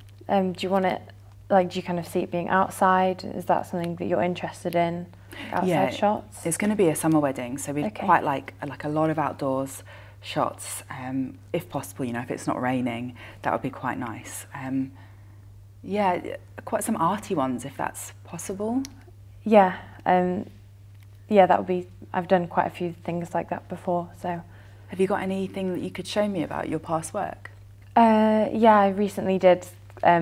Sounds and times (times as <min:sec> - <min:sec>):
Inside, small room: 0:00.0 - 0:30.2
Speech: 0:00.3 - 0:14.9, 0:25.0 - 0:30.2.